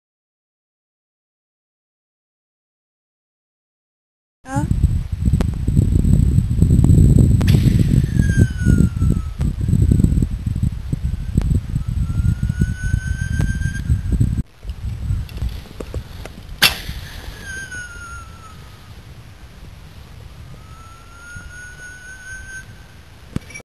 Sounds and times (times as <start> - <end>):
Whistling: 7.8 - 10.2, 11.7 - 14.4, 16.6 - 18.9, 20.5 - 23.6.